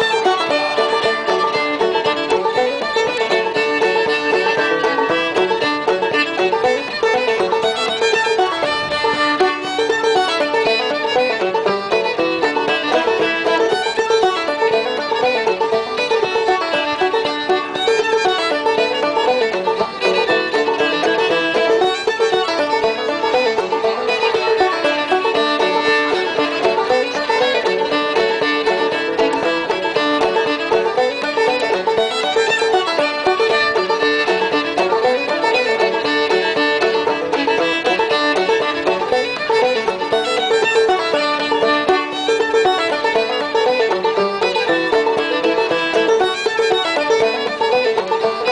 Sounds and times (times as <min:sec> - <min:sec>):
Violin, fiddle: 0:00.0 - 0:48.5.